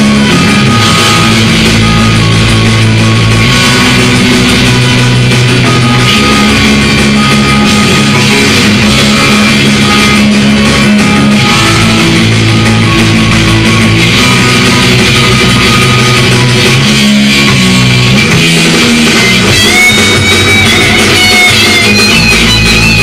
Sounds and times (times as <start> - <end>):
Bass guitar: 0.0 - 23.0
Heavy metal: 0.0 - 23.0.